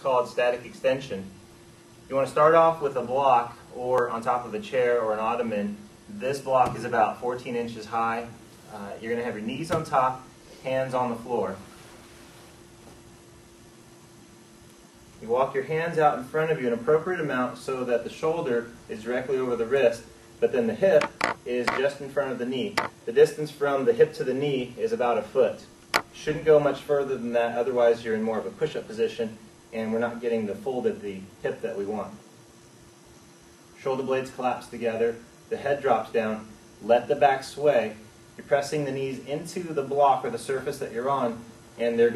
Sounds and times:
Speech: 0:00.0 - 0:01.4, 0:02.1 - 0:11.7, 0:15.2 - 0:32.2, 0:33.8 - 0:42.1.

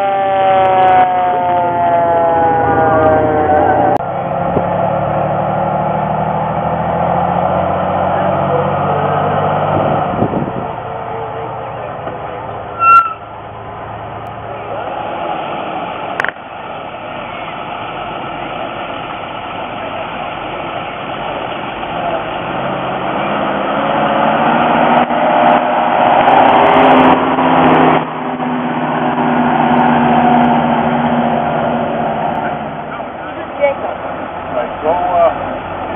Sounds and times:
Truck: 0:00.0 - 0:35.9.

